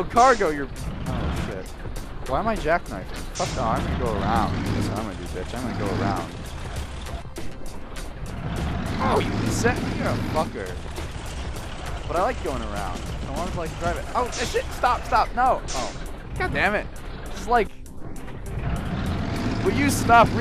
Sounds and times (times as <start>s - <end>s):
Speech: 0.0s - 0.7s, 1.5s - 1.7s, 2.3s - 6.3s, 9.0s - 10.8s, 12.1s - 17.7s, 19.6s - 20.4s
Music: 0.0s - 20.4s
Truck: 0.0s - 20.4s.